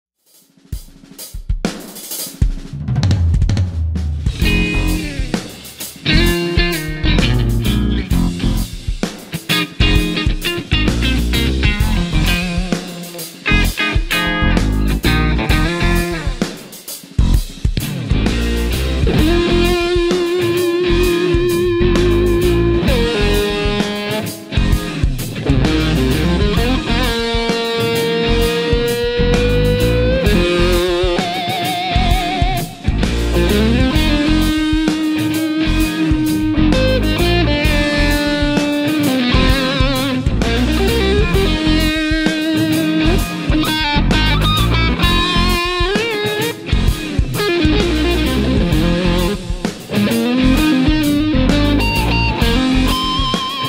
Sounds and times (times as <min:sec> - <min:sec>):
Drum kit: 0:00.2 - 0:53.6
Drum roll: 0:00.3 - 0:53.6
Bass drum: 0:00.8 - 0:27.6, 0:28.2 - 0:31.3, 0:32.0 - 0:46.1, 0:46.7 - 0:53.4
Guitar: 0:04.2 - 0:53.6.